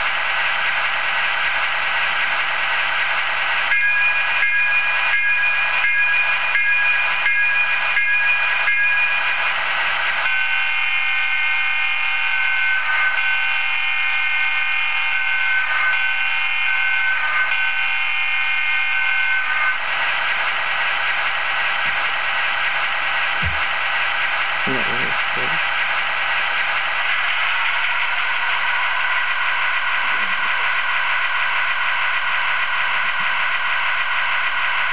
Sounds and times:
Speech: 0:24.6 - 0:25.7.

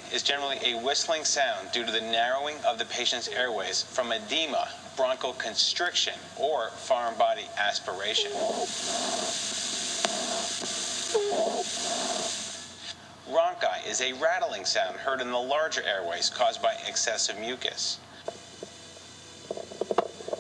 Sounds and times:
Speech: 0:00.1 - 0:08.7, 0:13.3 - 0:18.0.

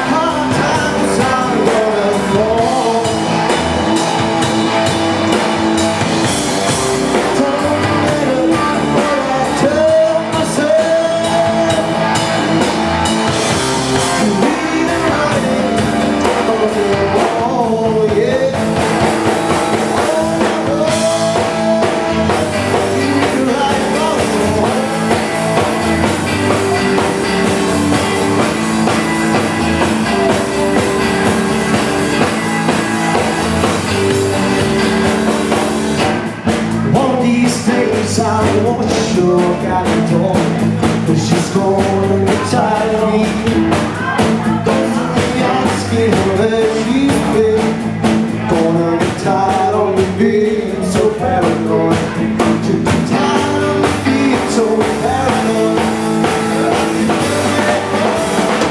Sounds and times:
Music: 0:00.0 - 0:58.7.

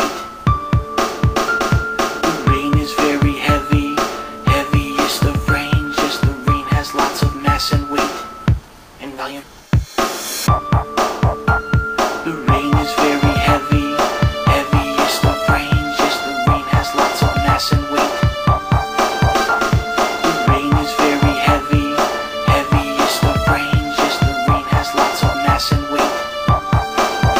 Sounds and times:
Music: 0:00.0 - 0:27.3.

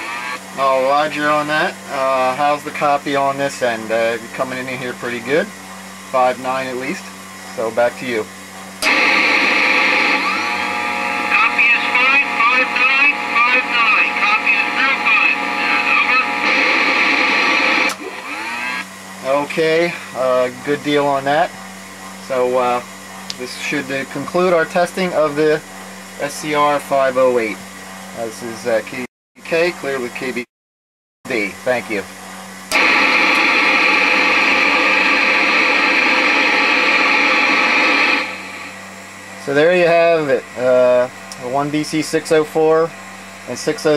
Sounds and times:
Radio: 0:00.0 - 0:02.4, 0:08.8 - 0:18.0, 0:32.7 - 0:38.7
Speech: 0:00.6 - 0:08.3, 0:11.3 - 0:16.4, 0:19.2 - 0:21.6, 0:22.2 - 0:25.6, 0:26.2 - 0:27.6, 0:28.2 - 0:30.5, 0:31.3 - 0:32.1, 0:39.4 - 0:43.9.

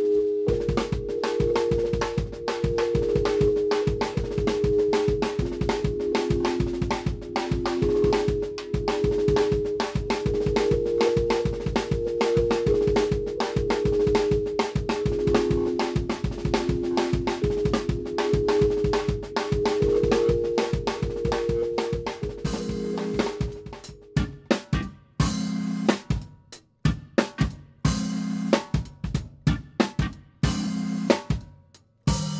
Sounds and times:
Music: 0:00.0 - 0:32.3.

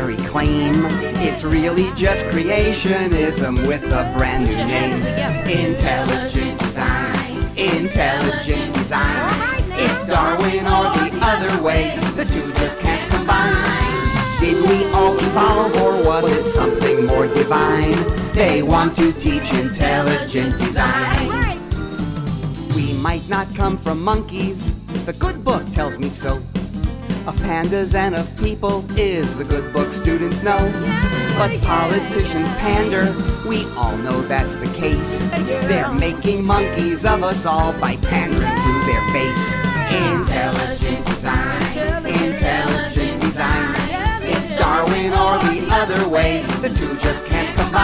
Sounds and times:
Music: 0:00.0 - 0:47.8.

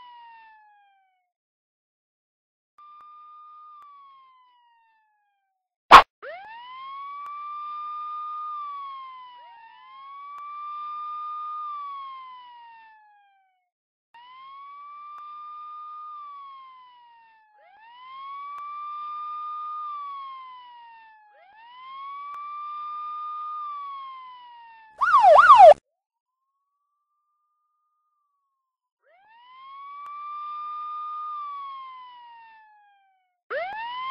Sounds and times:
Ambulance (siren): 0:00.0 - 0:01.2, 0:03.1 - 0:05.3, 0:05.9 - 0:13.5, 0:14.2 - 0:25.8, 0:29.1 - 0:34.1
Police car (siren): 0:00.0 - 0:01.2, 0:03.0 - 0:13.6, 0:14.2 - 0:25.8, 0:29.1 - 0:34.1.

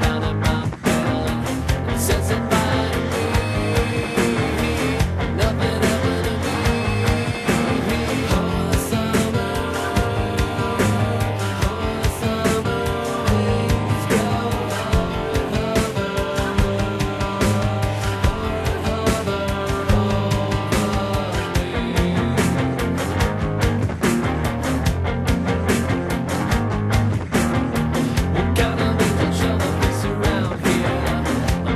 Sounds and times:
Music: 0:00.0 - 0:31.7.

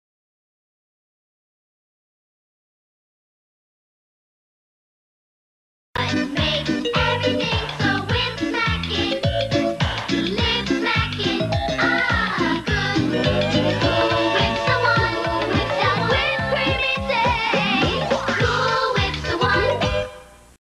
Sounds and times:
Music: 0:06.0 - 0:20.6.

